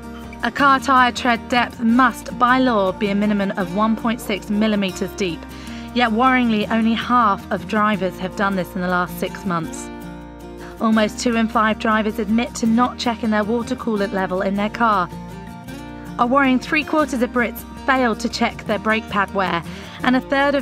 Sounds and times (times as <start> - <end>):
Music: 0.0 - 20.6
Speech: 0.4 - 9.9, 10.8 - 15.1, 16.2 - 20.6.